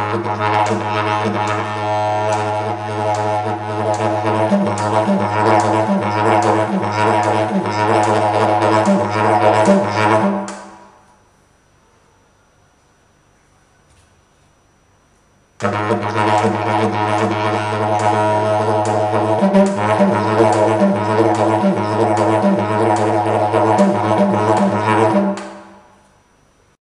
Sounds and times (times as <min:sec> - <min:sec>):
Didgeridoo: 0:00.0 - 0:11.1, 0:15.6 - 0:26.0.